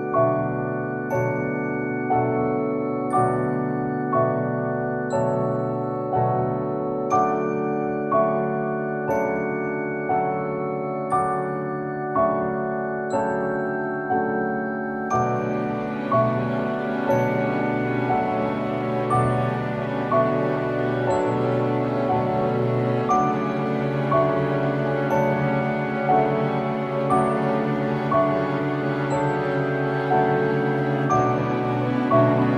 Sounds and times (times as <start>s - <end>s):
Music: 0.0s - 32.5s.